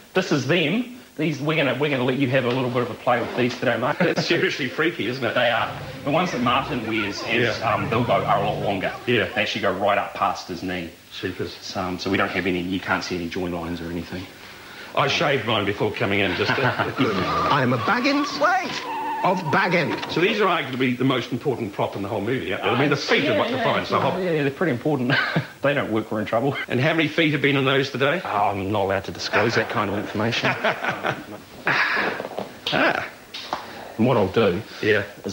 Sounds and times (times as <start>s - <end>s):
Speech: 0.2s - 14.3s, 14.9s - 30.7s, 34.0s - 35.3s.